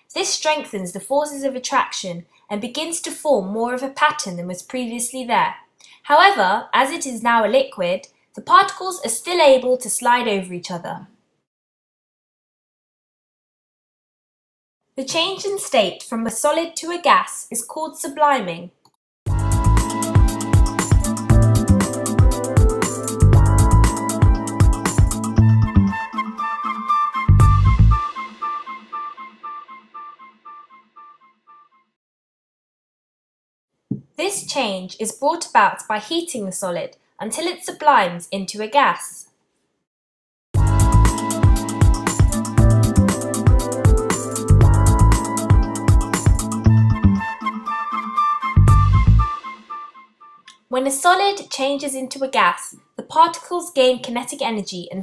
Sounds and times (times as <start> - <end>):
Music: 19.3 - 32.0, 40.6 - 50.5.